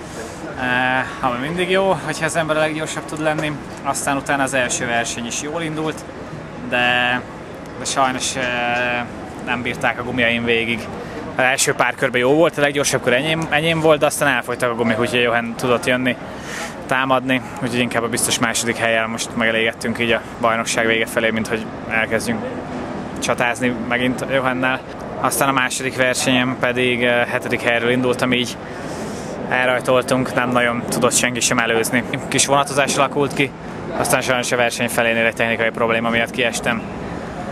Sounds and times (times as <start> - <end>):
Speech: 0.0 - 22.6, 23.2 - 28.6, 29.5 - 36.9.